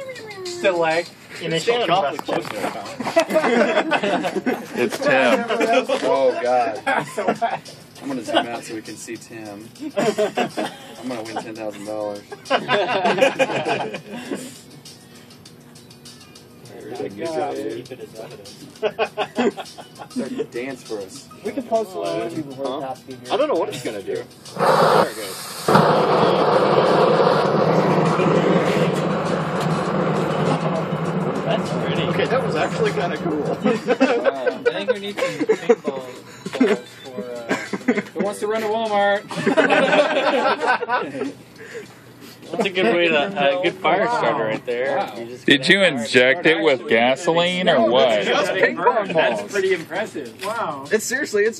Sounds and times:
Music: 0.0s - 51.5s.

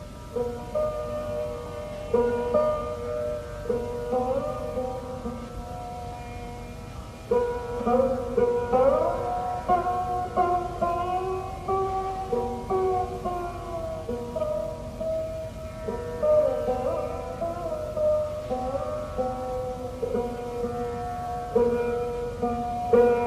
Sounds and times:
Sitar: 0.0s - 23.2s.

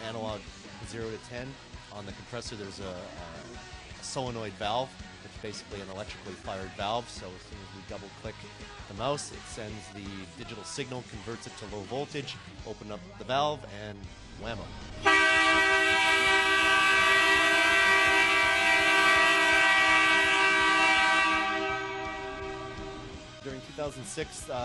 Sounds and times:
Train horn: 15.0s - 23.3s
Siren: 15.1s - 23.2s.

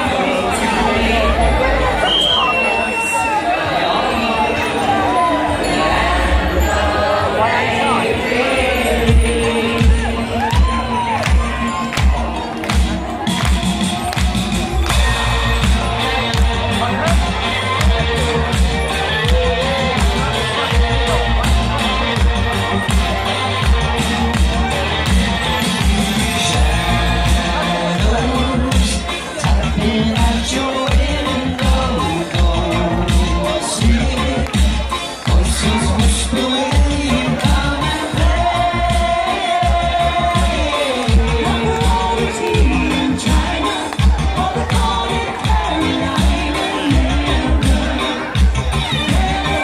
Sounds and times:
Music: 0.0s - 49.6s
Outside, urban or manmade: 0.0s - 49.6s.

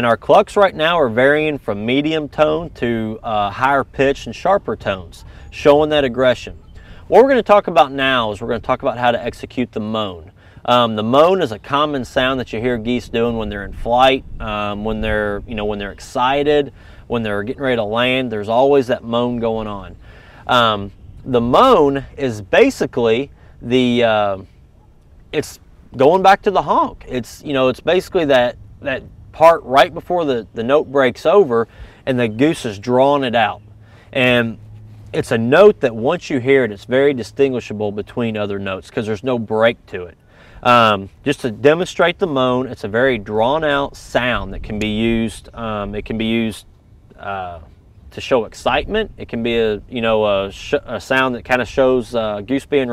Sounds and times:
Speech: 0.0s - 24.5s, 25.3s - 52.9s.

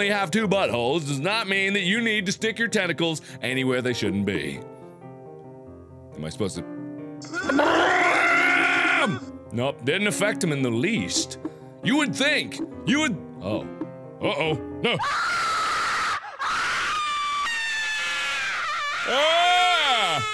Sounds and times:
Music: 0.0s - 16.2s
Speech: 6.2s - 6.7s.

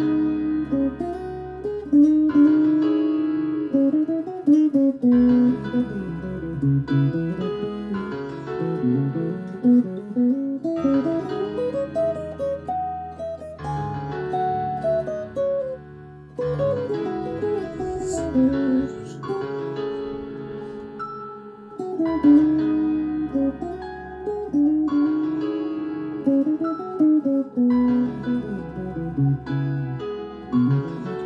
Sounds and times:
Strum: 0.0s - 31.2s.

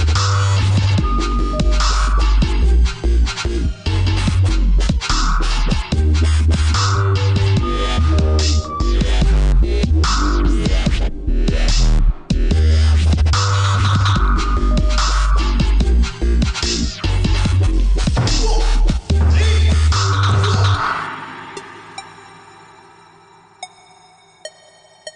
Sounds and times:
Dubstep: 0.0s - 22.7s.

